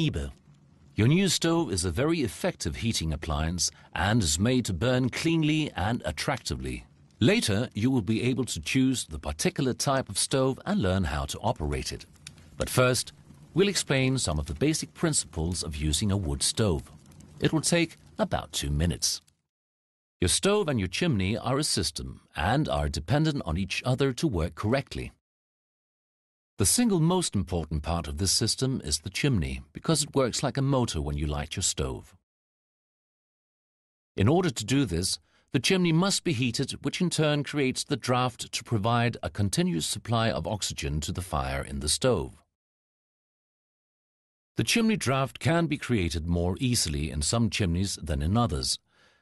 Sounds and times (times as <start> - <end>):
Speech: 0.0 - 0.4, 1.0 - 19.3, 20.2 - 25.2, 26.6 - 32.2, 34.2 - 42.5, 44.6 - 48.8.